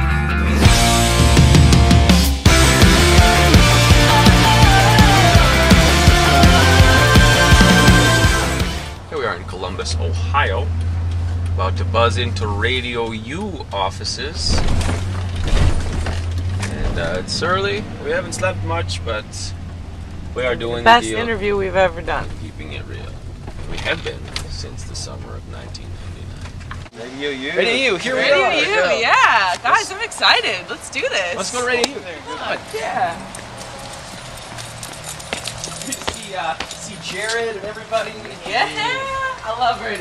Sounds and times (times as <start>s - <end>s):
Speech: 9.1s - 10.7s, 16.7s - 19.5s, 20.4s - 23.1s, 23.7s - 26.3s.